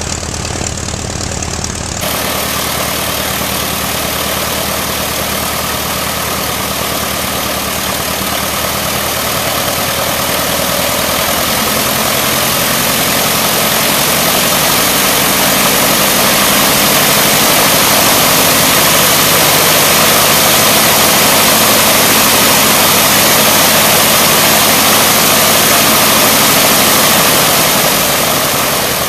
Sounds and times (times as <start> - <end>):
Engine: 0.0 - 29.0
Propeller, airscrew: 0.0 - 29.0.